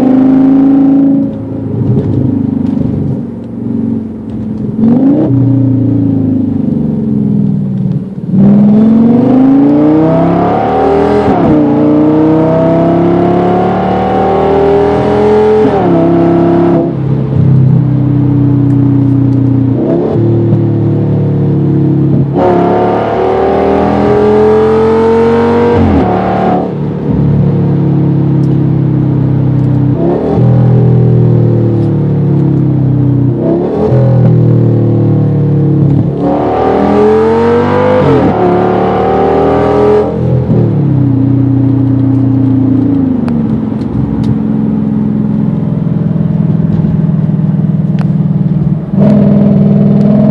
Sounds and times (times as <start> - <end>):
Accelerating, revving, vroom: 0.0 - 1.4, 4.8 - 5.9, 8.3 - 17.0, 19.8 - 20.8, 21.8 - 26.8, 29.6 - 31.9, 33.4 - 35.2, 35.8 - 40.8, 48.9 - 50.3.